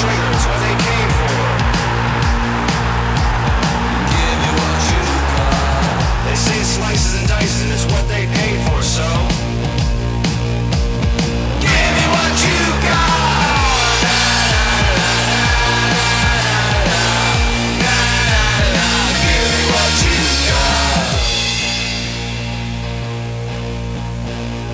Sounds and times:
Soundtrack music: 0.0 - 24.7.

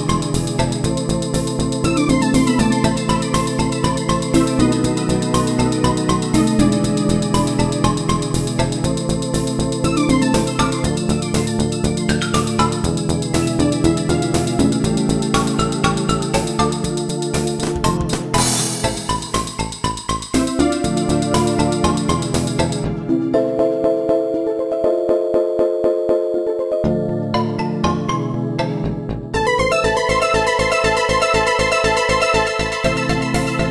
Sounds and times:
Music: 0.0 - 33.7.

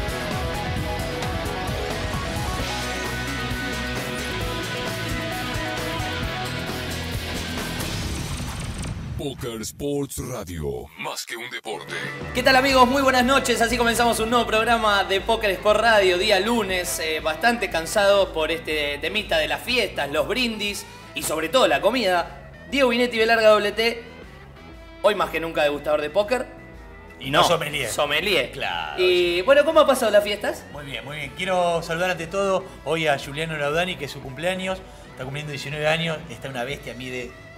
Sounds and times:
Music: 0.0 - 9.2, 11.5 - 37.5
Speech: 9.2 - 24.0, 27.2 - 37.3.

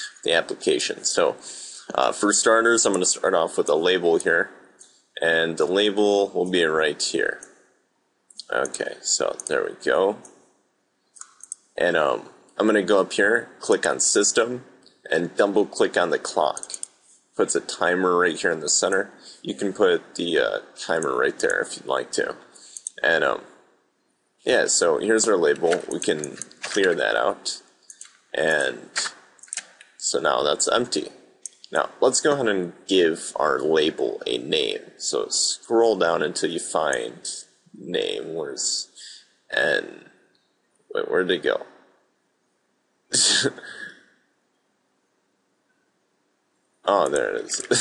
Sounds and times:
Speech: 0.0 - 4.6, 5.2 - 7.5, 8.4 - 10.3, 11.8 - 16.8, 17.4 - 23.5, 24.5 - 27.7, 28.4 - 40.1, 40.9 - 41.7, 43.1 - 44.0, 46.8 - 47.8.

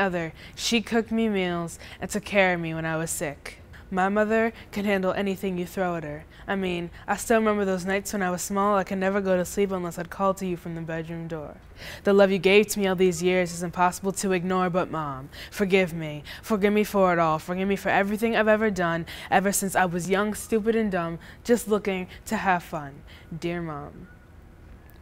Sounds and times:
Speech: 0.0 - 24.1.

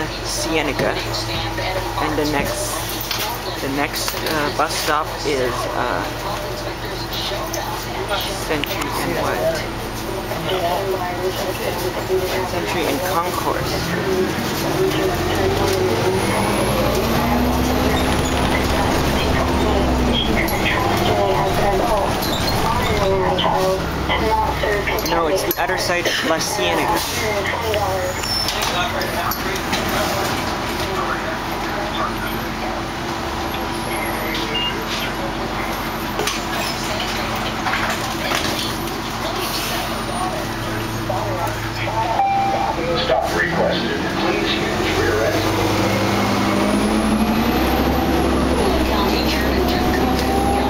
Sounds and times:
Bus: 0.0 - 50.6
Speech: 0.0 - 50.6.

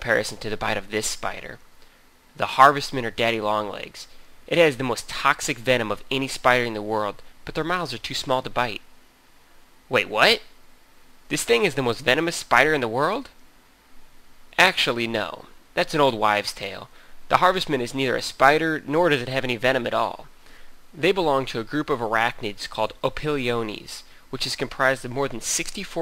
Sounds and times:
Speech: 0.0 - 1.6, 2.4 - 8.8, 9.9 - 10.5, 11.3 - 13.4, 14.6 - 20.3, 21.0 - 26.0.

